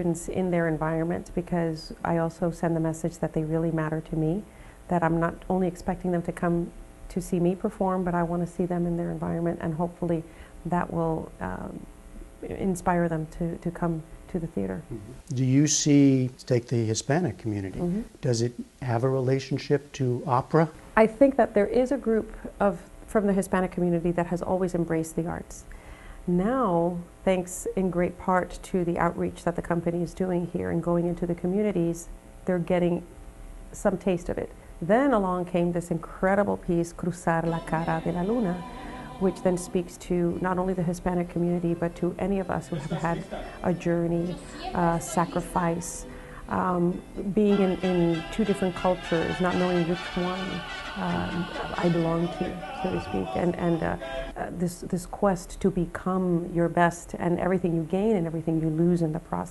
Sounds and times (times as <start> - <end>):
Speech: 0.0 - 11.8, 12.4 - 25.6, 26.3 - 33.1, 33.8 - 38.6, 39.2 - 59.5
Music: 37.4 - 54.4.